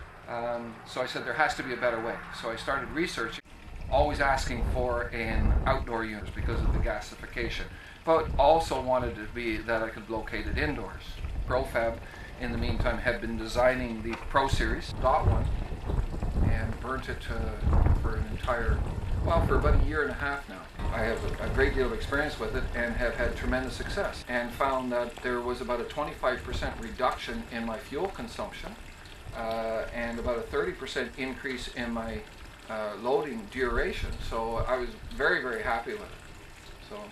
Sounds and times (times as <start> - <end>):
Speech: 0.3 - 15.5, 16.4 - 28.8, 29.4 - 36.2, 36.9 - 37.1.